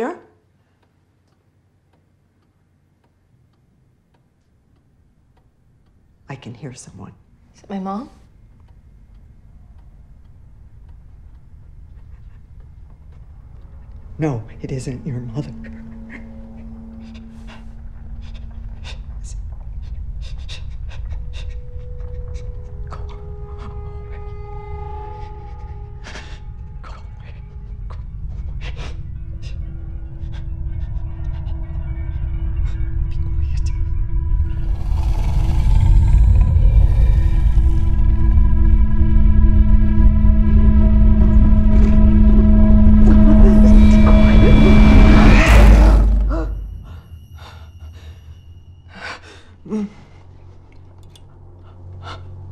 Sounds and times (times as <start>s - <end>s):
Music: 11.0s - 52.5s.